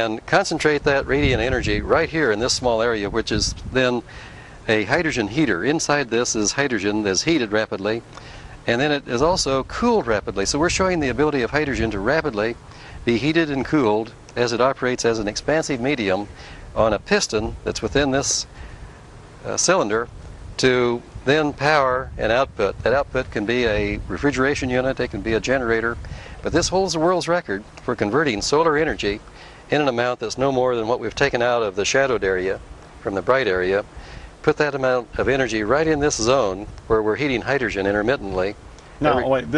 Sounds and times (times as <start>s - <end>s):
Speech: 0.0s - 4.1s, 4.7s - 8.0s, 8.6s - 18.5s, 19.4s - 39.5s.